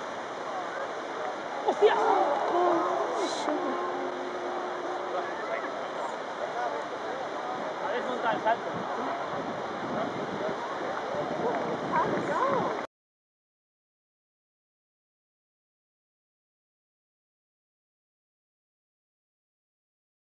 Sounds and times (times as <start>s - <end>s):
Speech: 0.4s - 3.8s, 4.9s - 12.9s.